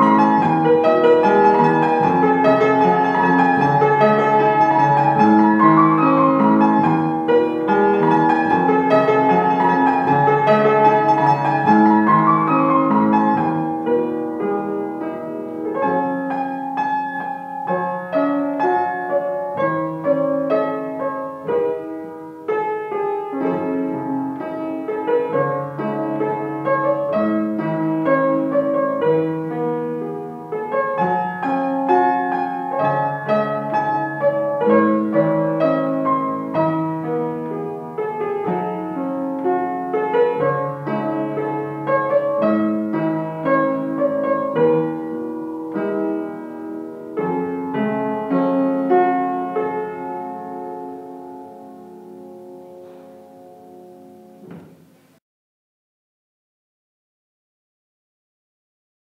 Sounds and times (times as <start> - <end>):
Classical music: 0.0 - 55.2
Piano: 0.0 - 55.2.